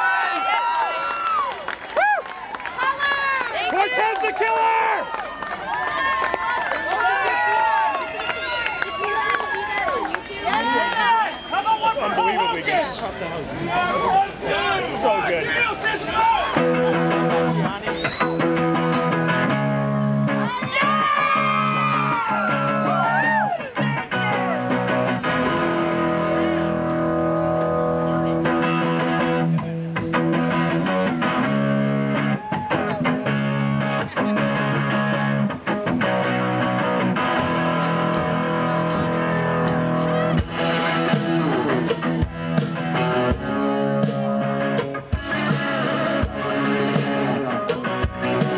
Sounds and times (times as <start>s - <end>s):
Music: 16.6s - 48.5s.